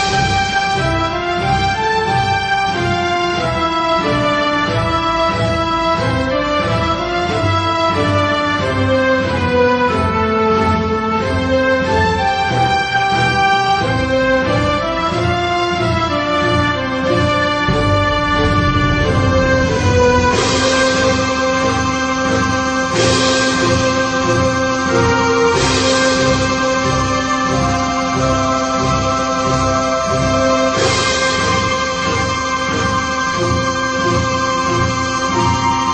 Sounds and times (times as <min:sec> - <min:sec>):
Orchestra: 0:00.0 - 0:35.9.